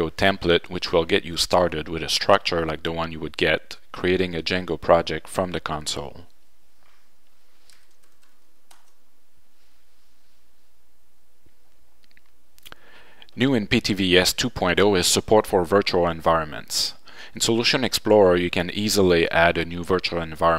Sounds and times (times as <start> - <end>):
Speech: 0.0 - 6.3, 13.4 - 20.5.